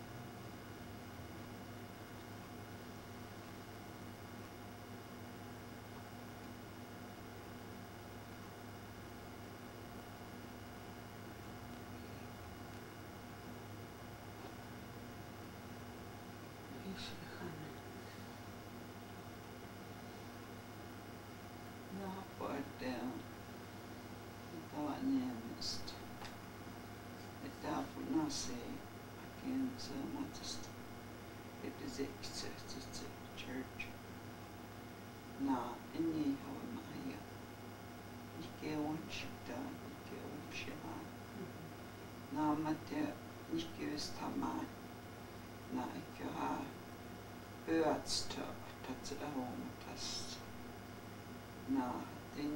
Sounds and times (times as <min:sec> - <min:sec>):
Speech: 0:16.7 - 0:18.0, 0:21.9 - 0:23.3, 0:24.5 - 0:26.2, 0:27.4 - 0:30.8, 0:31.6 - 0:34.0, 0:35.4 - 0:37.3, 0:38.3 - 0:41.7, 0:42.3 - 0:44.8, 0:45.7 - 0:46.8, 0:47.6 - 0:50.5, 0:51.7 - 0:52.5.